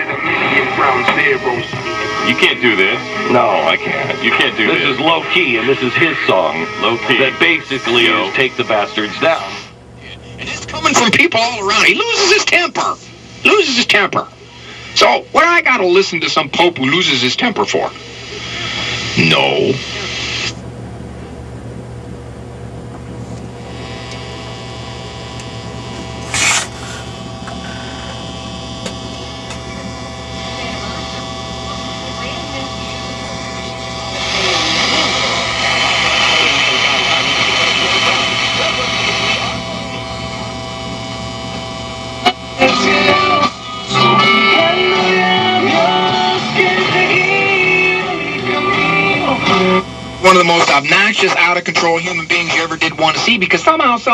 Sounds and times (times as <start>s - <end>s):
Speech: 0.0s - 20.3s, 29.6s - 40.2s, 50.2s - 54.1s
Radio: 0.0s - 20.6s, 23.1s - 54.1s.